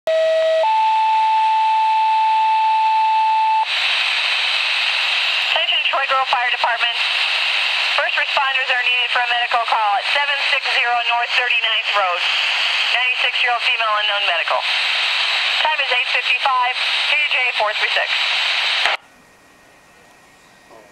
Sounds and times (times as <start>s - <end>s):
Radio: 3.6s - 19.0s.